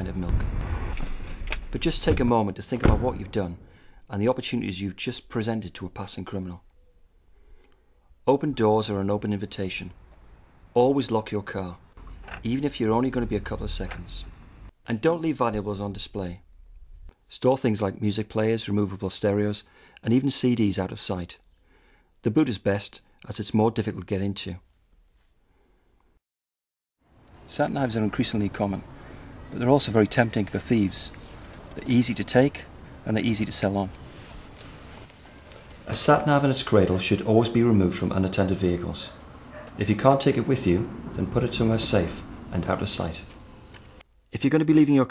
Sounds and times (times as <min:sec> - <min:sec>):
Speech: 0:00.0 - 0:00.4, 0:01.7 - 0:06.6, 0:08.3 - 0:10.0, 0:10.8 - 0:11.8, 0:12.4 - 0:16.4, 0:17.3 - 0:21.4, 0:22.2 - 0:24.7, 0:27.5 - 0:28.8, 0:29.5 - 0:31.2, 0:31.8 - 0:34.0, 0:35.8 - 0:39.2, 0:39.8 - 0:43.3, 0:44.3 - 0:45.1.